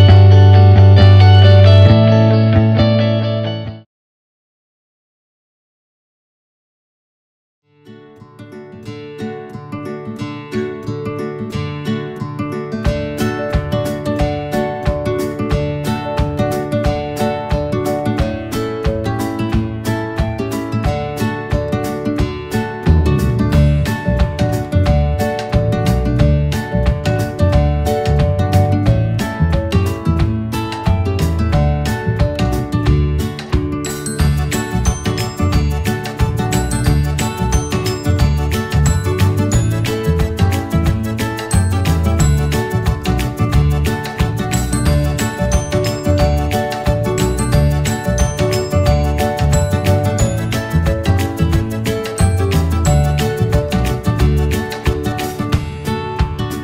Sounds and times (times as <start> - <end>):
Music: 0.0 - 3.9, 7.7 - 56.6.